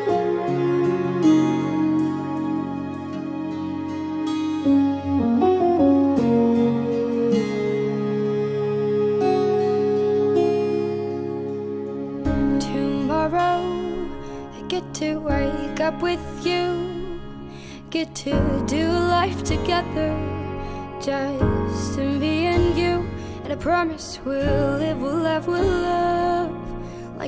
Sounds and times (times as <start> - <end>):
Tender music: 0.0 - 27.2.